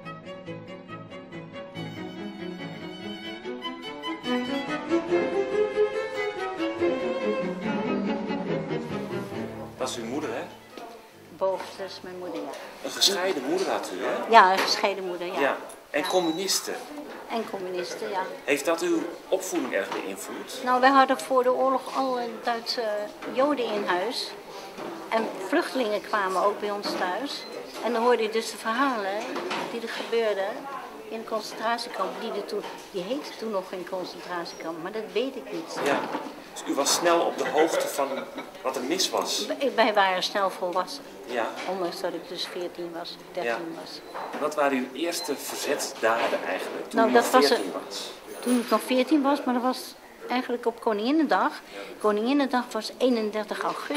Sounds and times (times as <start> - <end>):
Music: 0.0 - 14.0.